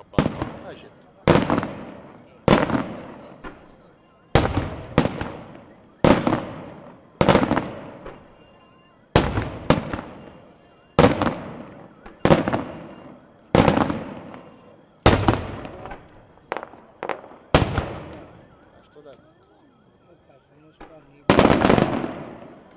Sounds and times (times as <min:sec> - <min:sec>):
Speech: 0:00.0 - 0:01.3, 0:15.6 - 0:16.1, 0:18.7 - 0:21.4
Fireworks: 0:00.0 - 0:22.7.